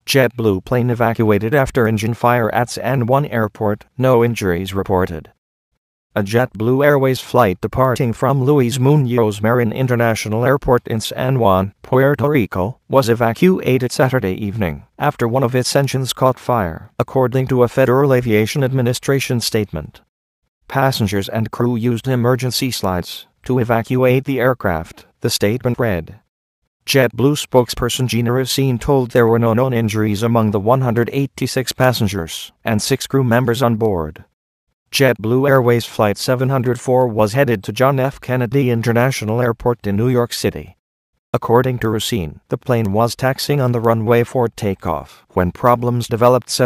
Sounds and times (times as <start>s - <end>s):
Speech: 0.0s - 5.4s, 6.2s - 20.1s, 20.7s - 26.3s, 26.9s - 34.3s, 34.9s - 40.8s, 41.4s - 46.6s.